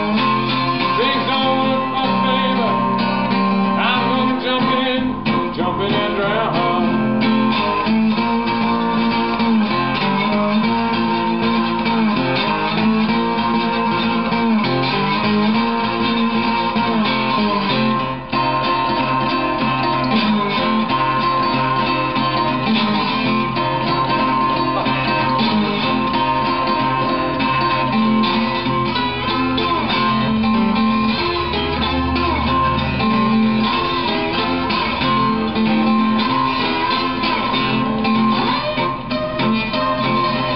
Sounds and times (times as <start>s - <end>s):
Acoustic guitar: 0.0s - 40.5s
Country: 0.0s - 40.5s
Strum: 0.0s - 40.5s.